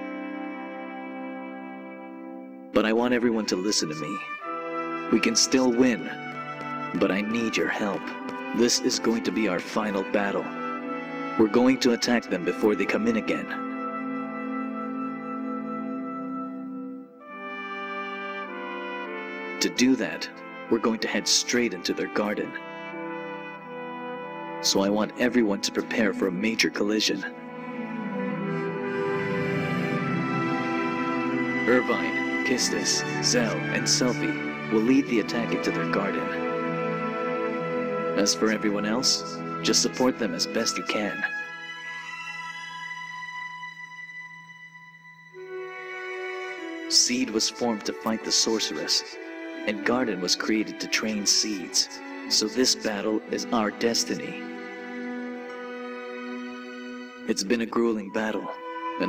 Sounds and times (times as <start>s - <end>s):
Music: 0.0s - 59.0s
Speech: 2.8s - 4.2s, 5.1s - 6.2s, 7.0s - 10.5s, 11.4s - 13.6s, 19.6s - 22.6s, 24.6s - 27.4s, 31.6s - 36.4s, 38.2s - 41.3s, 46.9s - 54.4s, 57.3s - 59.0s.